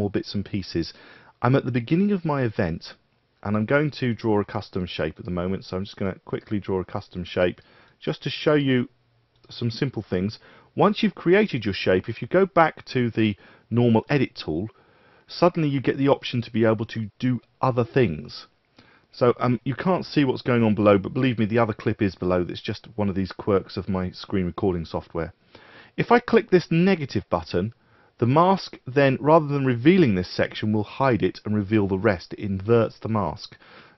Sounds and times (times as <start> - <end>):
Speech: 0.0 - 18.5, 19.2 - 25.4, 26.0 - 33.6.